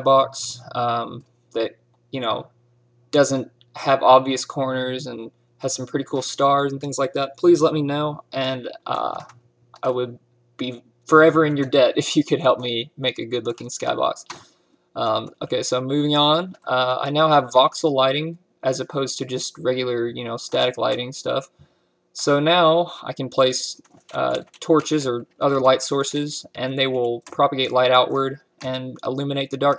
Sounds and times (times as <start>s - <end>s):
Speech: 0.0s - 2.5s, 3.2s - 14.4s, 15.0s - 21.6s, 22.2s - 29.7s.